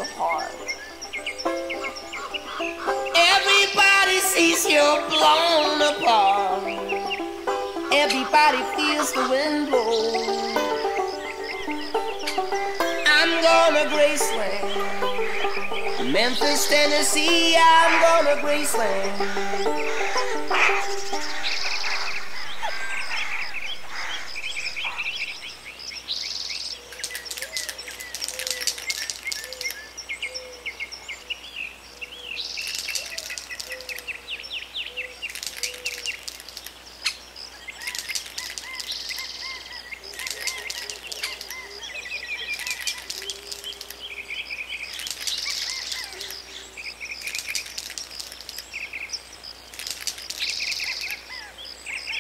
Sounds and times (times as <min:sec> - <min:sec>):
Cricket: 0:20.2 - 0:52.2.